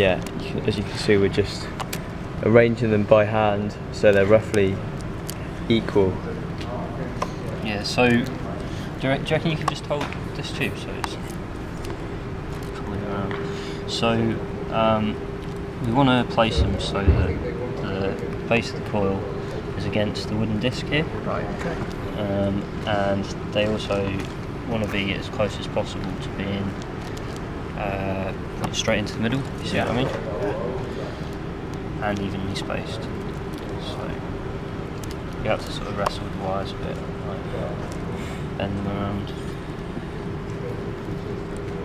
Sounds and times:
Speech: 0.0s - 1.7s, 2.4s - 4.8s, 5.7s - 11.3s, 12.8s - 15.2s, 15.8s - 26.8s, 27.8s - 31.0s, 32.0s - 33.2s, 33.8s - 34.2s, 35.4s - 37.9s, 38.6s - 39.4s.

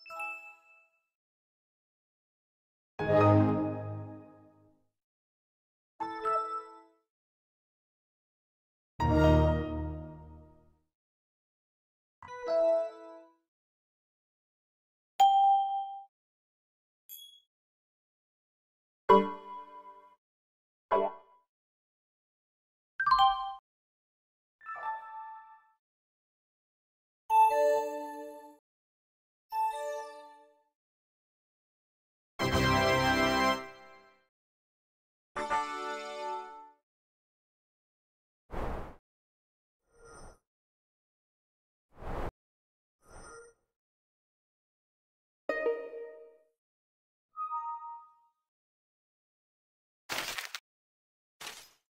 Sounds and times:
Ding: 15.2s - 16.1s, 17.1s - 17.5s.

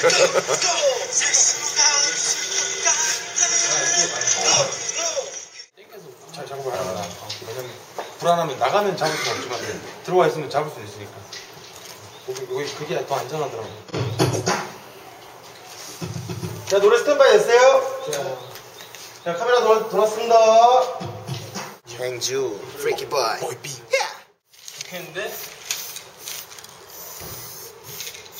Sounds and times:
Speech: 21.9s - 25.4s.

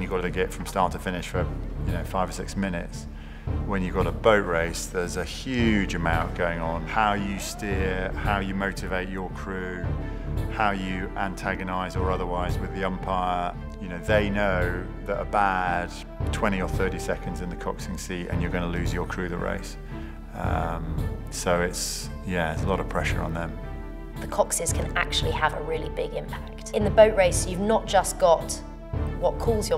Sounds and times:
Music: 0.0s - 29.7s
Speech: 3.7s - 9.9s, 20.4s - 23.6s, 24.2s - 28.6s, 29.2s - 29.7s.

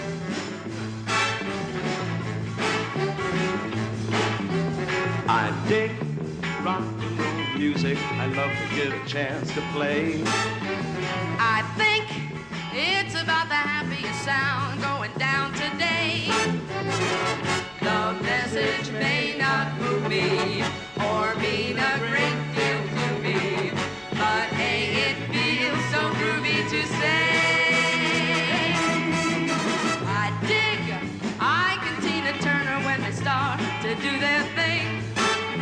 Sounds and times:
Rock and roll: 0.0s - 35.6s.

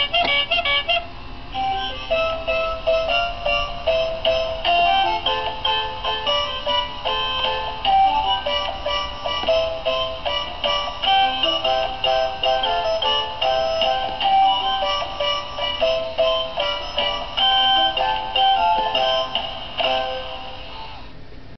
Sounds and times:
Music: 0.0s - 21.1s.

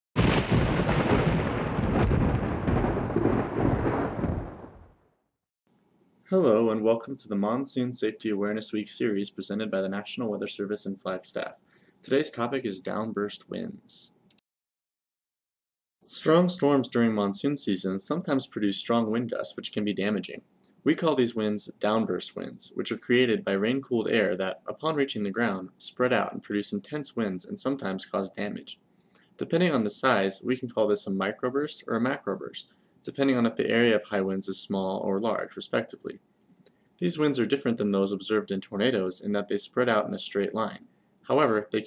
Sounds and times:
Thunderstorm: 0.2s - 5.2s
Outside, rural or natural: 0.2s - 5.3s
Speech: 6.3s - 14.2s, 16.1s - 28.8s, 29.4s - 36.2s, 37.0s - 41.8s.

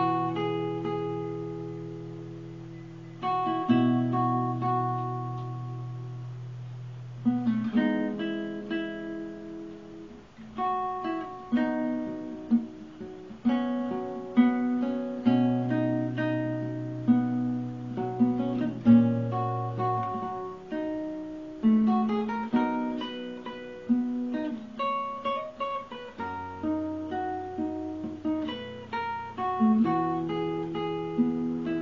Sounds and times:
Music: 0.0s - 31.8s.

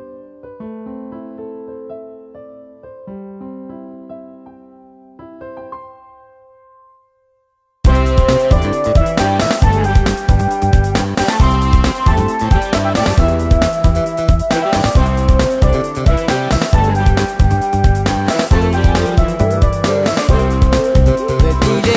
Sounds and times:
Exciting music: 7.9s - 21.9s.

